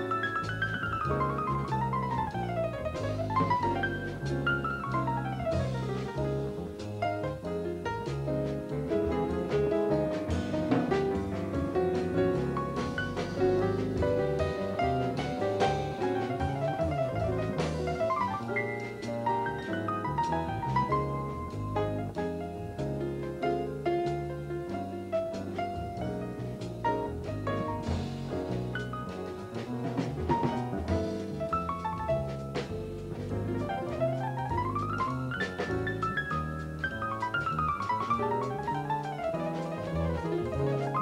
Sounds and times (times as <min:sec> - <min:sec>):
Music: 0:00.0 - 0:41.0.